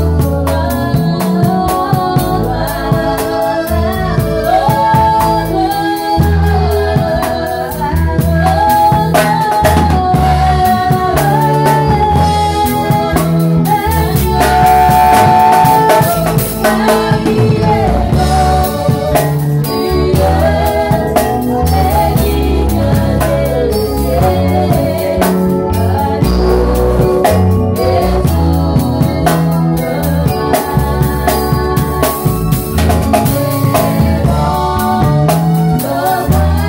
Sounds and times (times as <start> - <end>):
Music: 0.0 - 36.6.